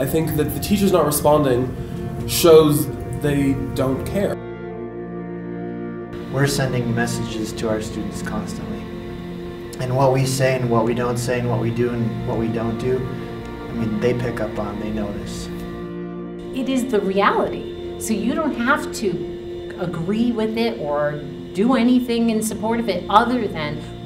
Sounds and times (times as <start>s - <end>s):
Speech: 0.0s - 1.7s, 6.4s - 8.8s, 9.8s - 13.1s, 13.7s - 15.5s, 16.6s - 23.9s
Music: 0.0s - 24.0s.